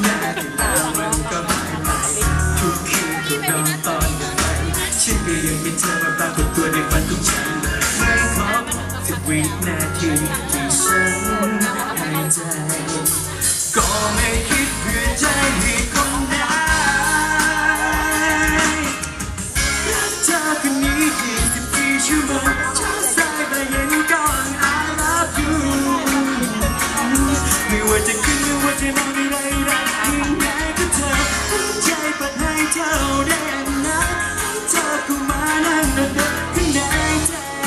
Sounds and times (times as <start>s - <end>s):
Speech: 0.0s - 6.2s, 7.5s - 13.8s
Music: 0.0s - 37.6s.